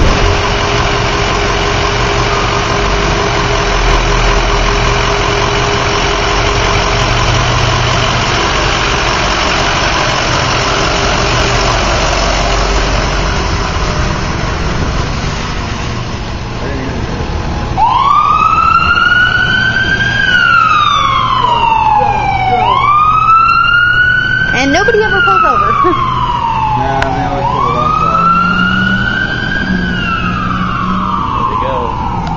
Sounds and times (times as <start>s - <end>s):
Ambulance (siren): 0.0s - 8.5s, 16.8s - 32.3s
Truck: 0.0s - 32.3s.